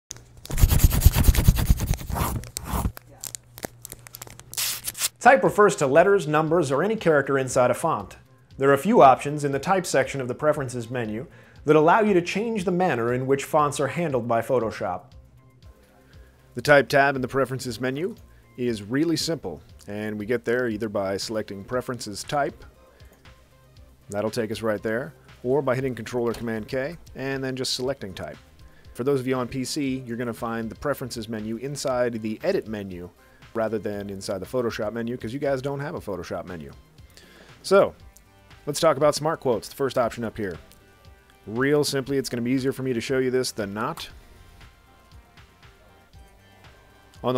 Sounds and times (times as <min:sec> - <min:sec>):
Inside, small room: 0:00.1 - 0:47.3
Speech: 0:05.2 - 0:15.1, 0:16.6 - 0:22.7, 0:24.1 - 0:28.4, 0:29.0 - 0:36.8, 0:37.6 - 0:38.0, 0:38.7 - 0:40.6, 0:41.5 - 0:44.1, 0:47.2 - 0:47.3.